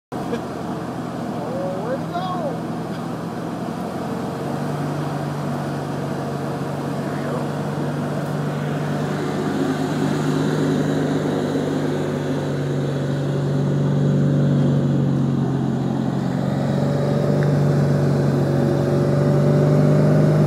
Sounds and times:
Car: 0.1s - 20.4s
Speech: 1.4s - 2.6s.

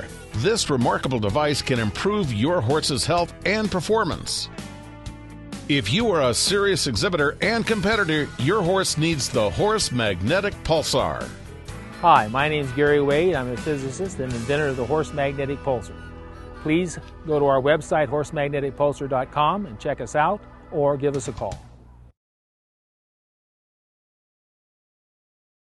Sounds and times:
Speech: 0.0s - 4.5s, 5.7s - 11.3s, 12.0s - 15.9s, 16.7s - 21.6s.

